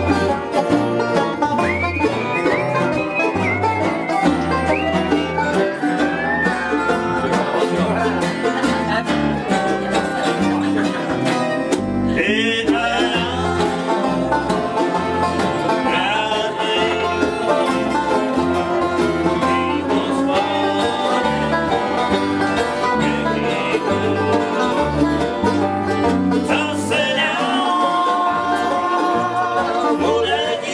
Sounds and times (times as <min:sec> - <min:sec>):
Country: 0:00.0 - 0:30.7.